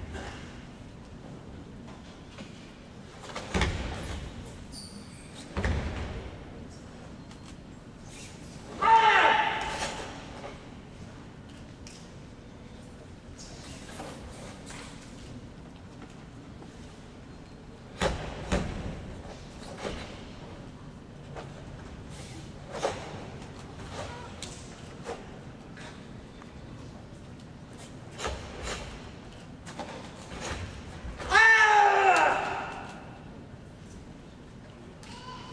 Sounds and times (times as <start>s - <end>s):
Inside, large room or hall: 0.0s - 35.5s.